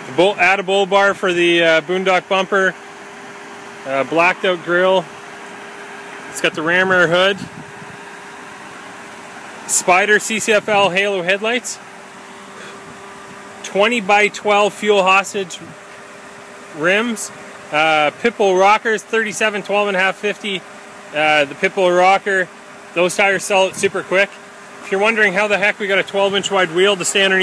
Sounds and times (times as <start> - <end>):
Car: 0.0 - 27.4
Speech: 0.1 - 2.8, 3.8 - 5.1, 6.3 - 7.5, 9.7 - 11.8, 13.6 - 15.8, 16.8 - 20.6, 21.2 - 27.4.